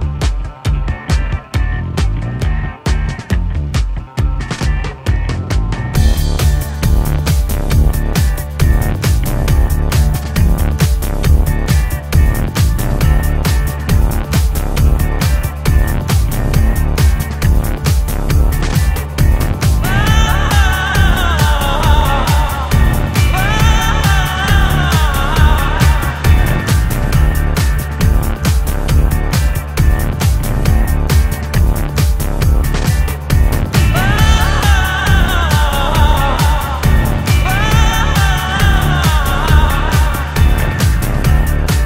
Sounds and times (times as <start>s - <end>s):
Music: 0.0s - 41.8s.